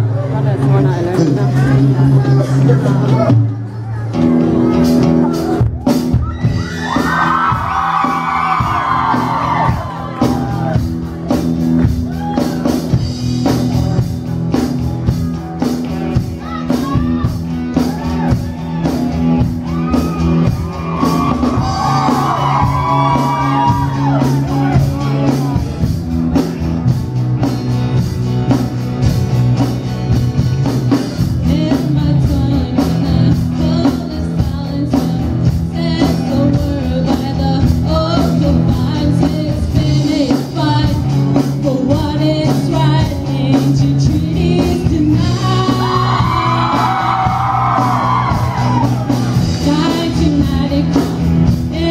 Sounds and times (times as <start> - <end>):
Music: 0.0 - 51.9.